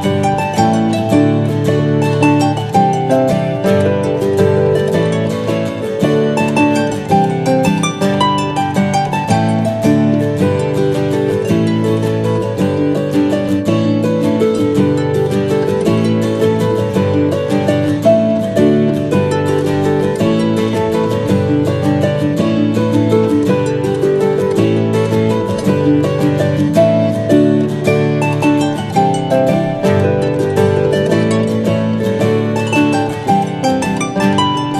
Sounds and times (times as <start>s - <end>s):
Music: 0.0s - 34.7s.